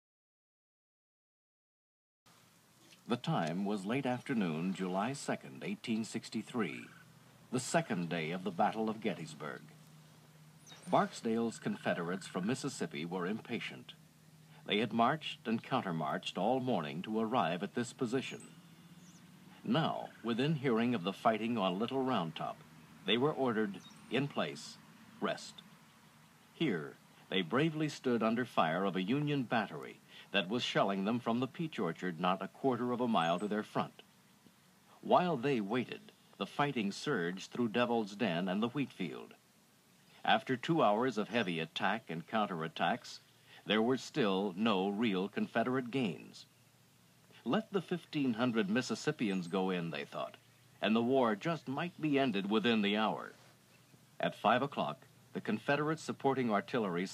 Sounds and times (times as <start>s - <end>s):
Speech: 3.1s - 9.7s, 10.8s - 14.0s, 14.6s - 18.4s, 19.6s - 25.6s, 26.6s - 34.0s, 34.9s - 39.4s, 40.2s - 46.5s, 47.4s - 53.5s, 54.2s - 57.1s.